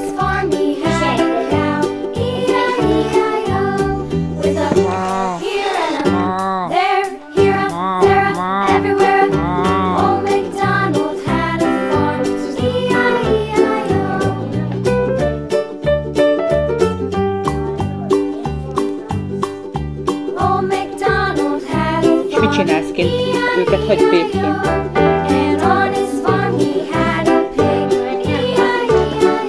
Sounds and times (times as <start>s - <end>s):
Jingle (music): 0.0s - 4.7s, 5.6s - 29.4s
Speech: 22.3s - 24.6s.